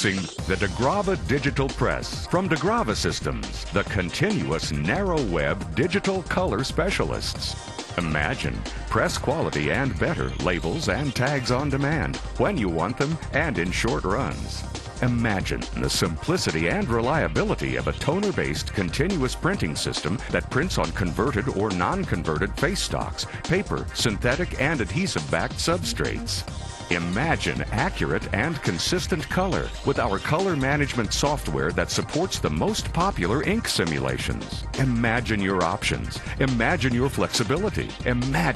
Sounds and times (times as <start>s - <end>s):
Music: 0.0s - 38.5s
Speech: 0.0s - 38.5s.